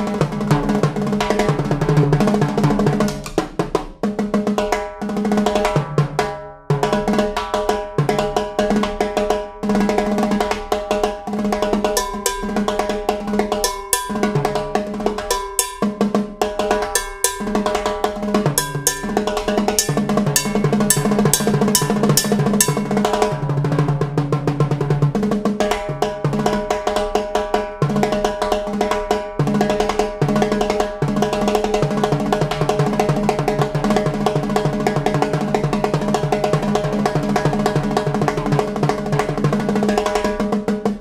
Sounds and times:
Drum roll: 0:00.0 - 0:41.0.

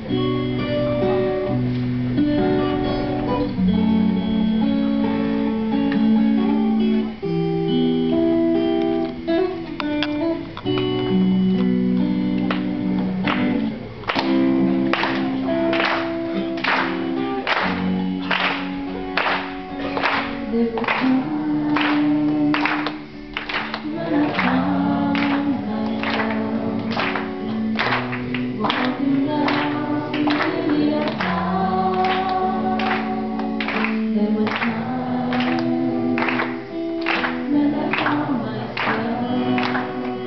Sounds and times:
Electric guitar: 0:00.0 - 0:40.2.

